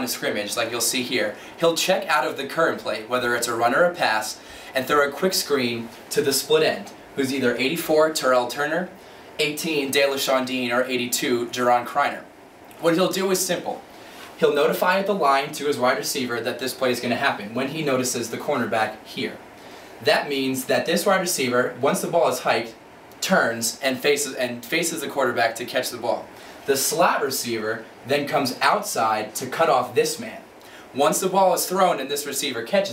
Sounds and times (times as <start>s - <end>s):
Speech: 0.0s - 32.9s.